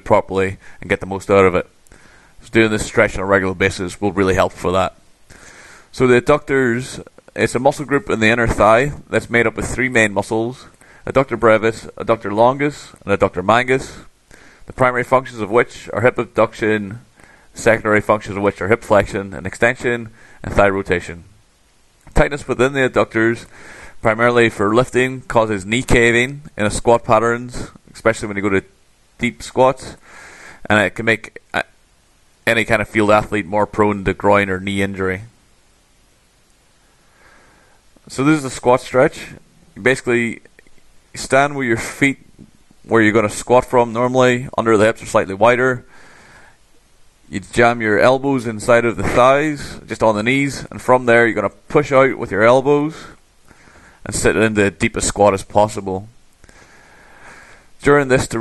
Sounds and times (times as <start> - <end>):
Speech: 0.0 - 1.7, 2.4 - 5.0, 5.9 - 14.1, 14.7 - 21.4, 22.1 - 30.0, 30.6 - 31.8, 32.4 - 35.4, 38.0 - 40.6, 41.2 - 45.9, 47.3 - 53.2, 54.0 - 56.2, 57.8 - 58.4.